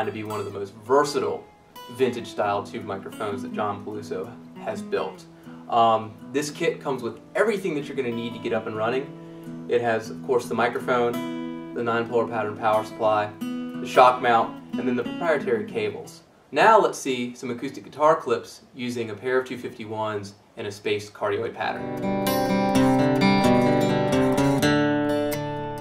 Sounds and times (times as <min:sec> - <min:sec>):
Speech: 0:00.0 - 0:09.1, 0:09.7 - 0:11.2, 0:11.8 - 0:21.8
Music: 0:00.0 - 0:16.2, 0:21.7 - 0:25.8.